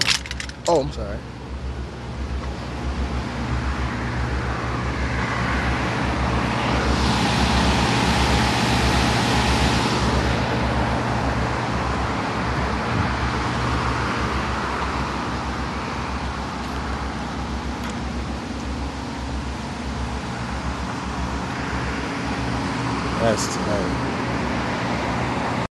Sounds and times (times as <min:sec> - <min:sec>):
Car: 0:00.0 - 0:25.7
Speech: 0:00.7 - 0:01.2, 0:23.2 - 0:24.0.